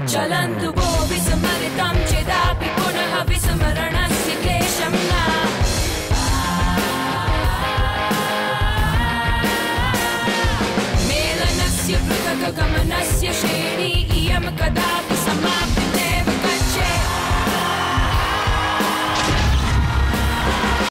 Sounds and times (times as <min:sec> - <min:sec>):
Heavy metal: 0:00.0 - 0:20.9.